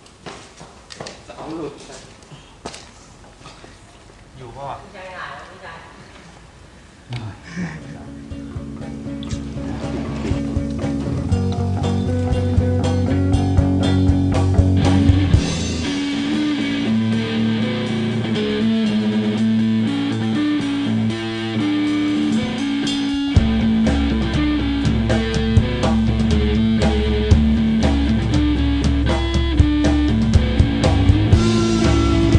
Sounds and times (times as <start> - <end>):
Speech: 1.3 - 2.2, 4.4 - 6.1, 7.1 - 8.2
Blues: 7.8 - 32.3.